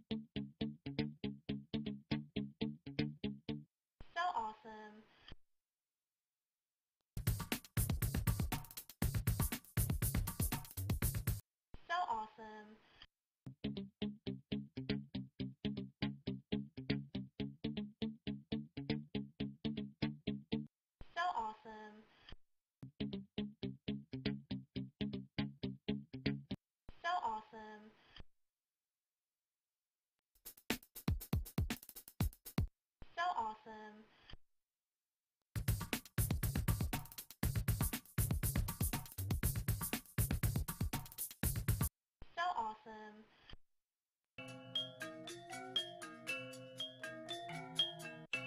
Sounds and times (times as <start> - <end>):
Music: 0.0 - 3.7, 7.2 - 11.4, 13.5 - 20.7, 22.8 - 26.6, 30.5 - 32.7, 35.6 - 41.9, 44.4 - 48.4
Speech: 4.2 - 5.1, 11.9 - 12.8, 21.2 - 22.1, 27.0 - 28.0, 33.1 - 34.1, 42.4 - 43.3.